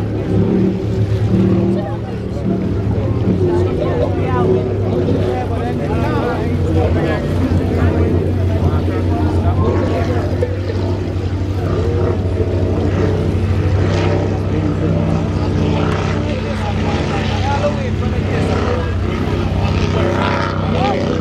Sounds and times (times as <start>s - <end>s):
Motorboat, speedboat: 0.0s - 21.2s
Speech: 1.2s - 21.2s.